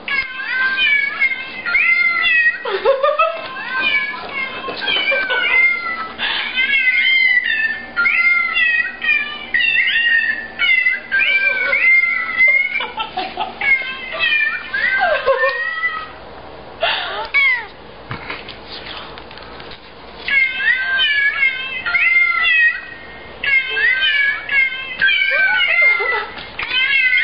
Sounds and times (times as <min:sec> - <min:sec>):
Meow: 0:00.1 - 0:02.6, 0:03.5 - 0:12.7, 0:17.4 - 0:17.7, 0:20.3 - 0:22.9, 0:23.5 - 0:27.2
Caterwaul: 0:03.4 - 0:12.8, 0:23.5 - 0:27.2.